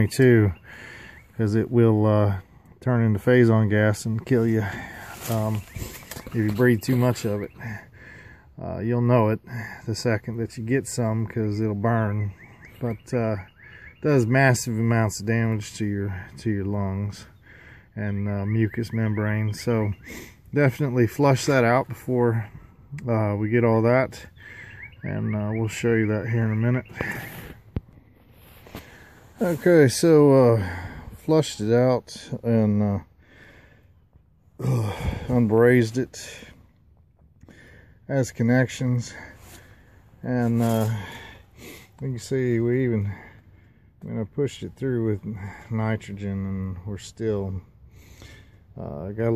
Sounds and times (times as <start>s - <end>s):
Speech: 0.0s - 0.6s, 1.4s - 7.9s, 8.6s - 17.4s, 18.0s - 24.3s, 25.0s - 27.3s, 29.4s - 33.1s, 34.6s - 36.6s, 38.1s - 39.4s, 40.2s - 41.2s, 42.0s - 43.3s, 44.0s - 47.7s, 48.8s - 49.3s
Outside, urban or manmade: 0.0s - 49.3s.